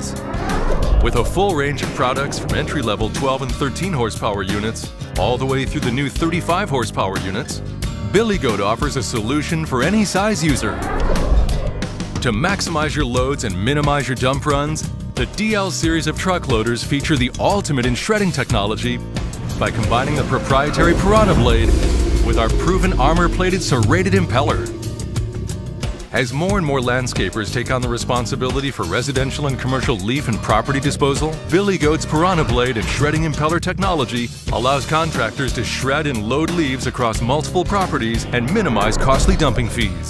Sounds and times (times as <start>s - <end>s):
Music: 0.0s - 40.0s
Speech: 1.0s - 10.8s, 12.2s - 19.0s, 19.6s - 24.8s, 26.1s - 40.0s.